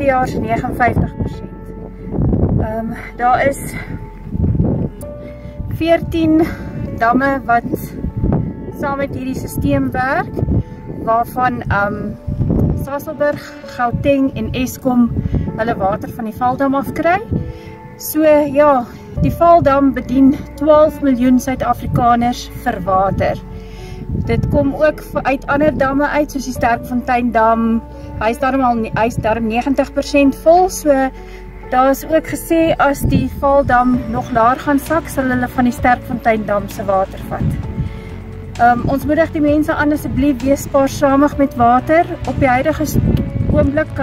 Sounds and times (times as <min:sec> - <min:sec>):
Speech: 0:00.0 - 0:01.4, 0:02.6 - 0:03.8, 0:05.8 - 0:07.8, 0:11.1 - 0:12.1, 0:12.8 - 0:17.3, 0:18.1 - 0:23.4, 0:24.3 - 0:31.1, 0:31.7 - 0:37.5, 0:38.6 - 0:44.0
Music: 0:00.0 - 0:44.0.